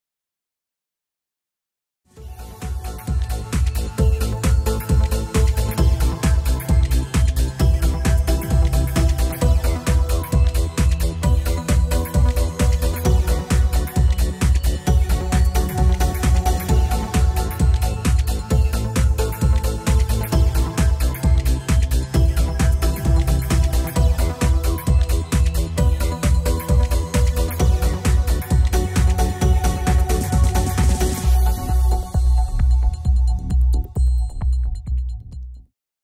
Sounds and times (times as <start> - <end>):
Music: 2.1 - 35.7.